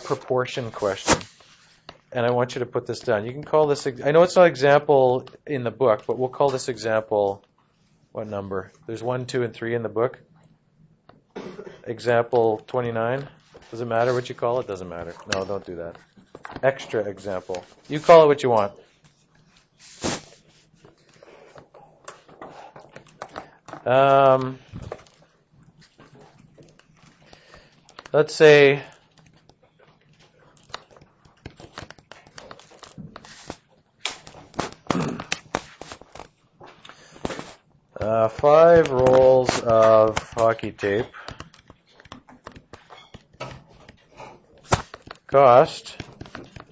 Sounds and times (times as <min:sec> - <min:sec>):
Speech: 0:00.0 - 0:01.1, 0:02.1 - 0:07.4, 0:08.2 - 0:10.2, 0:11.8 - 0:16.0, 0:16.6 - 0:18.8, 0:23.8 - 0:24.6, 0:28.1 - 0:28.9, 0:38.0 - 0:41.2, 0:45.3 - 0:46.1
Inside, small room: 0:00.0 - 0:46.7.